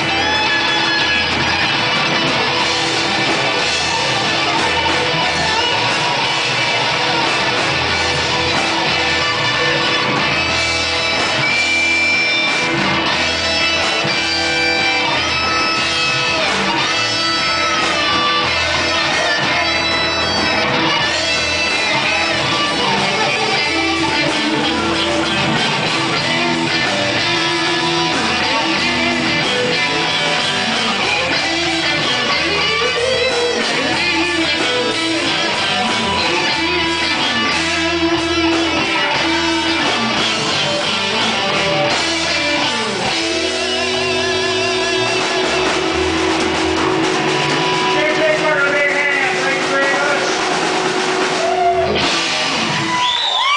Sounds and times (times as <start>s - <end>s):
Electric guitar: 0.0s - 53.5s.